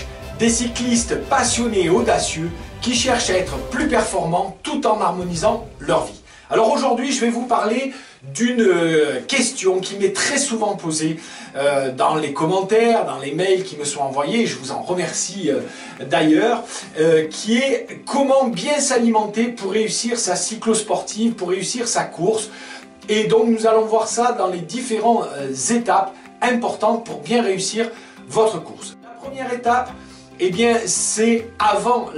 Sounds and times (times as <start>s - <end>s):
Speech: 0.0s - 22.5s, 23.1s - 32.1s
Music: 0.0s - 32.1s.